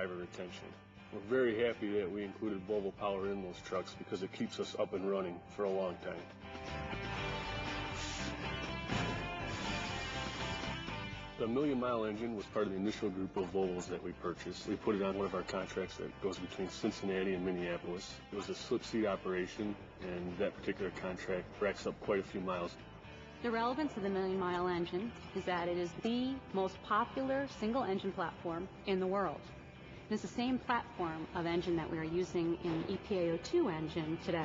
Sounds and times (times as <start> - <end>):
Music: 0.0 - 34.4
Speech: 11.4 - 22.8.